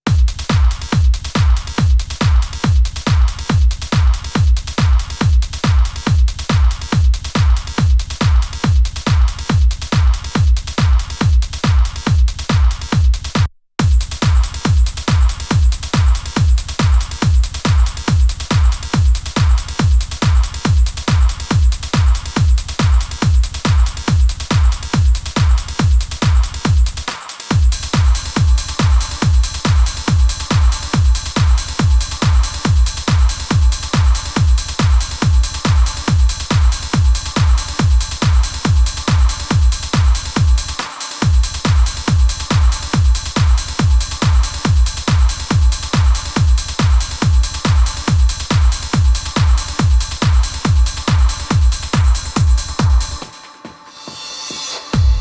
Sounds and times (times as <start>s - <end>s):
Techno: 0.0s - 55.2s.